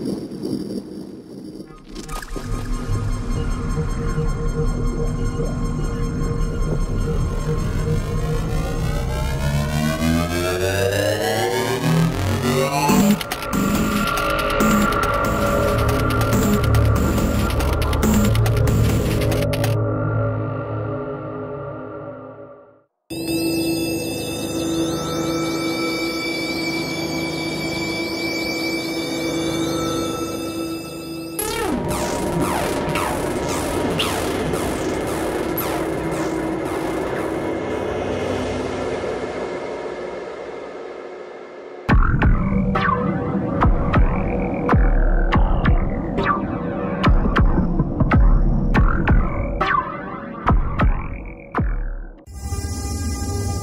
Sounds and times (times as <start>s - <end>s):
Hum: 0.0s - 50.0s.